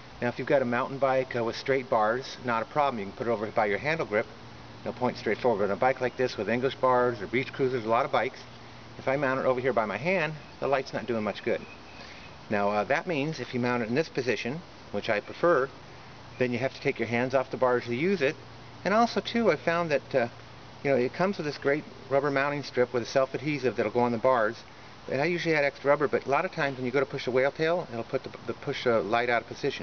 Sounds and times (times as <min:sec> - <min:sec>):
Outside, urban or manmade: 0:00.0 - 0:29.8
Speech: 0:00.2 - 0:11.7, 0:12.5 - 0:15.7, 0:16.4 - 0:29.8.